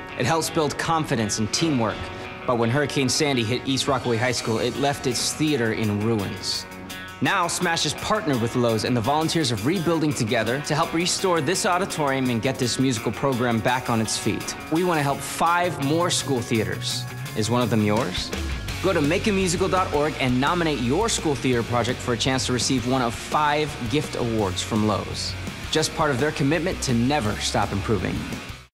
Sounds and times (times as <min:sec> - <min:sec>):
Music: 0:00.0 - 0:28.7
Speech: 0:00.2 - 0:28.4.